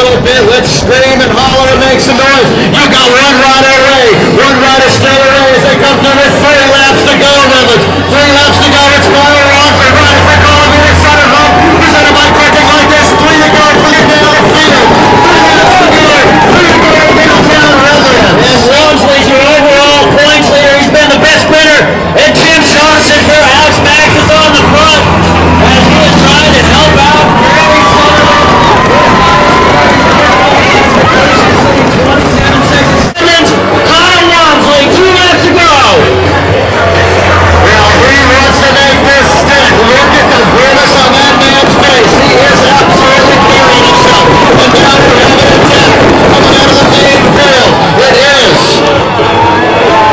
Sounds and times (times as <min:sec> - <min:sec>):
Speech: 0:00.0 - 0:49.2.